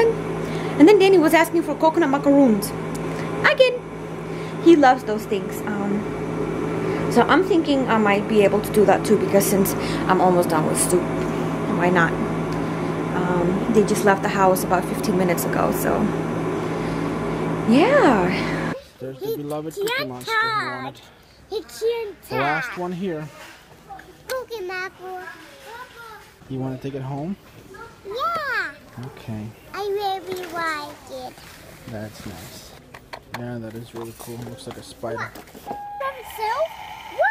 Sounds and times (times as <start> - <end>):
Child speech, kid speaking: 18.8 - 26.4, 27.7 - 31.4, 34.4 - 37.3.